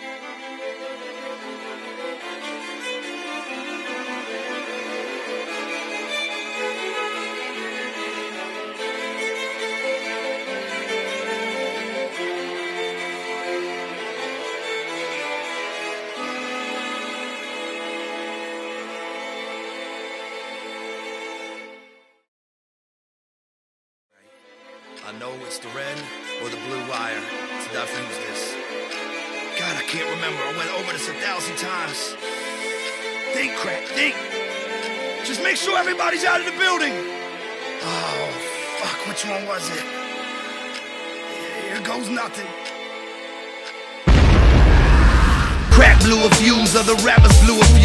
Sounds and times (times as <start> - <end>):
Background music: 0.0 - 22.2, 24.3 - 47.8
Speech: 25.0 - 28.6, 29.6 - 32.2, 33.3 - 34.2, 35.2 - 37.0, 37.8 - 39.9, 41.5 - 42.5, 45.7 - 47.8.